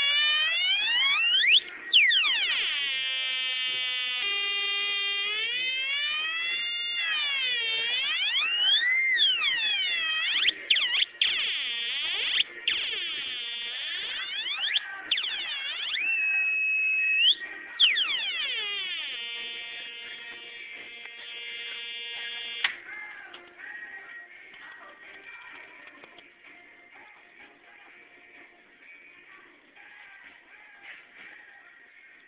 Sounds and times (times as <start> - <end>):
Siren: 0.0 - 22.8
Synthesizer: 0.0 - 32.2.